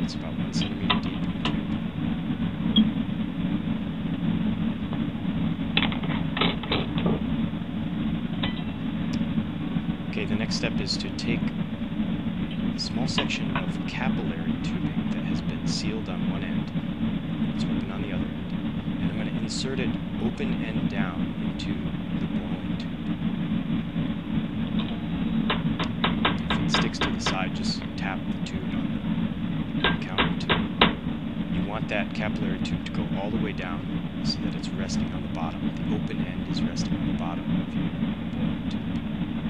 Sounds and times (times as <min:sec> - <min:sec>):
Speech: 0:00.0 - 0:01.4, 0:10.1 - 0:11.6, 0:12.8 - 0:16.8, 0:17.6 - 0:18.3, 0:19.0 - 0:22.8, 0:26.5 - 0:28.9, 0:29.8 - 0:30.5, 0:31.6 - 0:37.7.